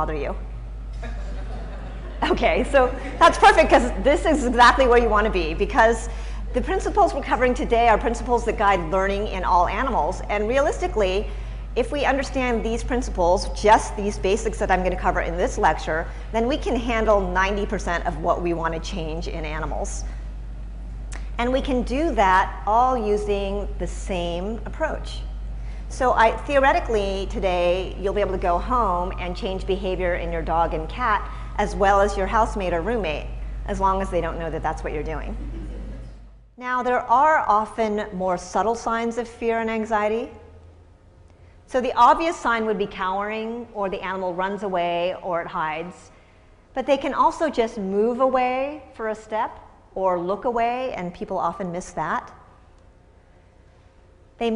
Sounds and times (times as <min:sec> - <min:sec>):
Speech: 0:00.0 - 0:00.4, 0:02.2 - 0:20.0, 0:21.4 - 0:25.3, 0:25.9 - 0:35.4, 0:36.6 - 0:40.4, 0:41.7 - 0:46.0, 0:46.8 - 0:52.4.